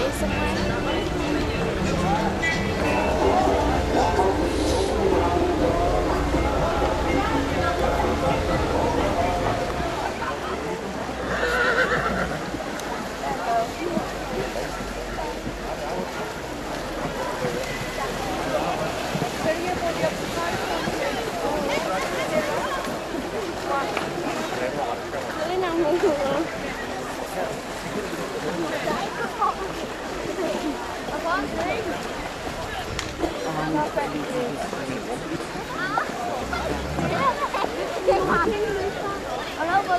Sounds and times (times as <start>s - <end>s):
Neigh, whinny: 11.2s - 12.4s
Clip-clop: 11.2s - 38.9s
Speech: 12.5s - 39.9s.